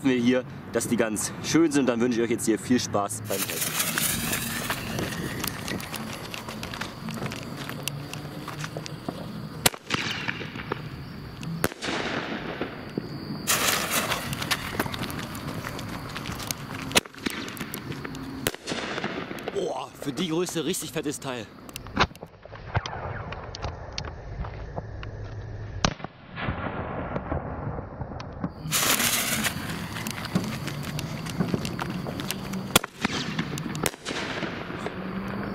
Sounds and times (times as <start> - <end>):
Speech: 0.0 - 3.6, 19.6 - 21.5
Fireworks: 3.3 - 35.5.